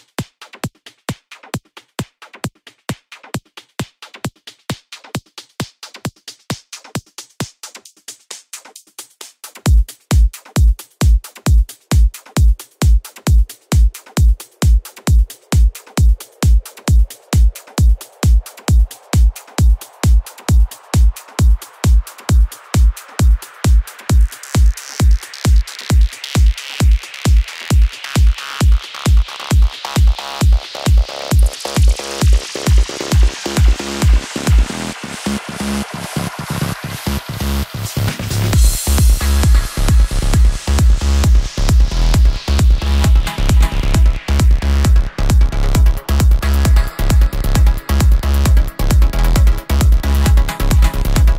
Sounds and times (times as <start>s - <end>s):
Techno: 0.0s - 51.3s.